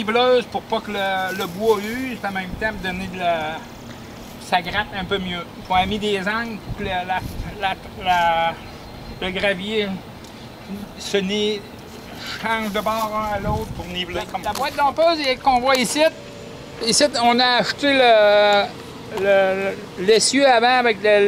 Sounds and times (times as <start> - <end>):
Speech: 0.0 - 3.7, 4.4 - 8.6, 9.2 - 10.0, 10.7 - 16.2, 16.8 - 21.2.